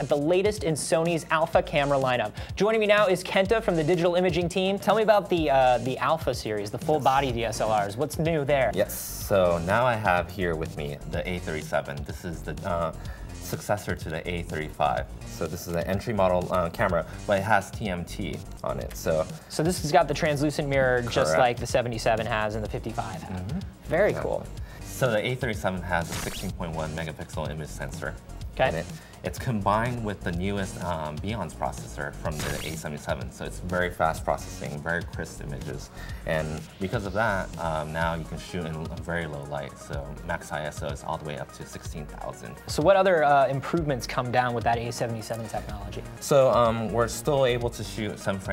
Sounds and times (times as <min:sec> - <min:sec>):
Music: 0:00.0 - 0:48.5
Speech: 0:00.0 - 0:48.5.